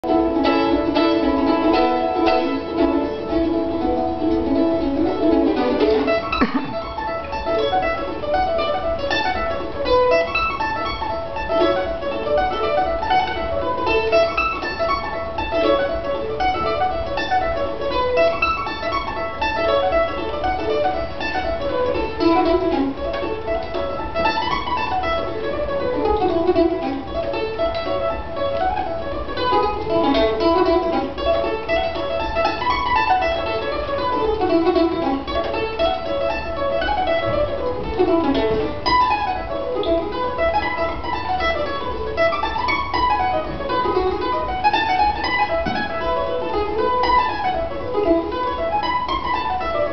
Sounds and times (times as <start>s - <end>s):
Bluegrass: 0.0s - 49.9s
Mandolin: 0.0s - 49.9s
Pizzicato: 0.0s - 49.9s.